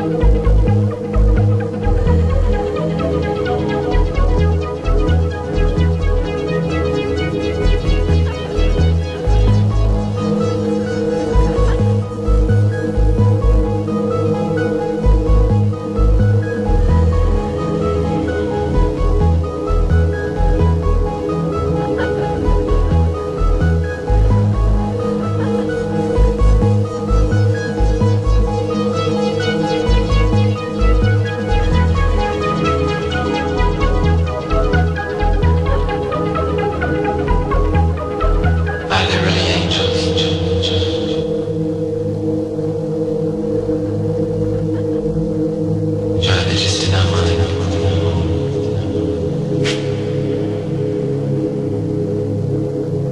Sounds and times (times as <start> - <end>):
Ambient music: 0.0 - 53.1.